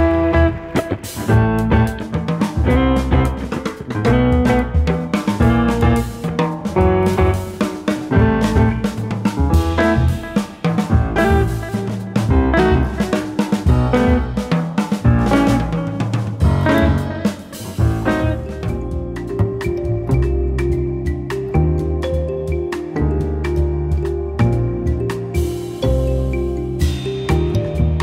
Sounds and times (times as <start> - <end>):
Jazz: 0.0 - 28.0
Musical instrument: 0.0 - 28.0.